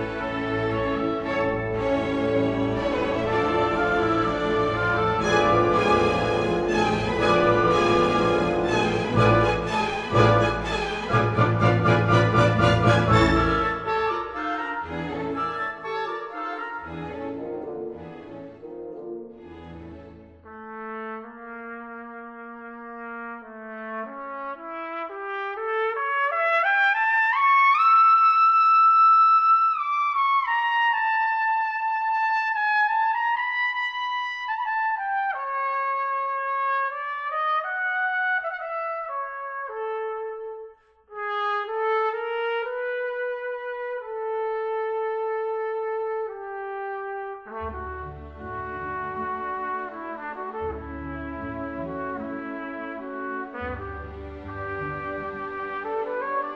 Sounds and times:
Violin, fiddle: 0.0s - 20.5s, 53.2s - 56.5s.

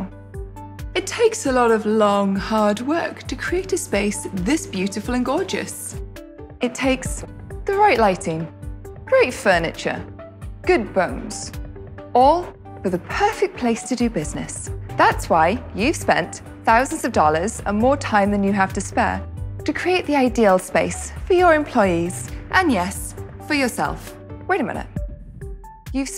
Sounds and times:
Music: 0.0s - 26.1s
Speech: 1.0s - 6.0s, 6.6s - 8.5s, 9.1s - 10.1s, 10.7s - 11.5s, 12.2s - 25.0s, 26.0s - 26.1s.

